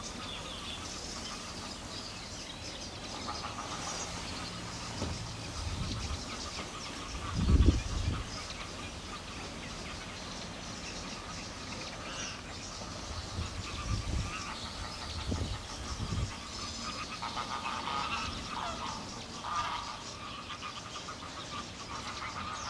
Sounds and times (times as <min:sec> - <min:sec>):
Bird: 0:00.0 - 0:22.7.